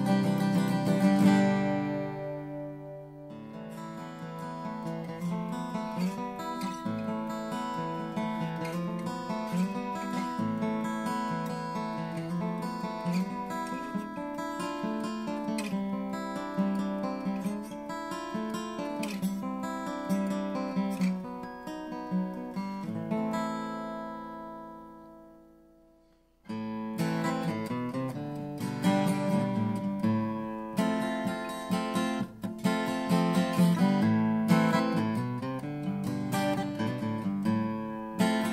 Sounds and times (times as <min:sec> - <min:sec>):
Music: 0:00.0 - 0:38.5.